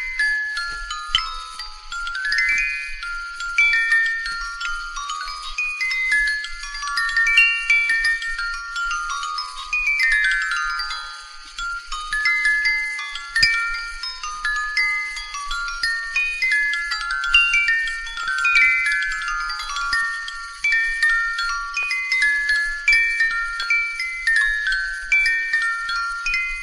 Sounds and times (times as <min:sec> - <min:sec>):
Chime: 0:00.0 - 0:26.6.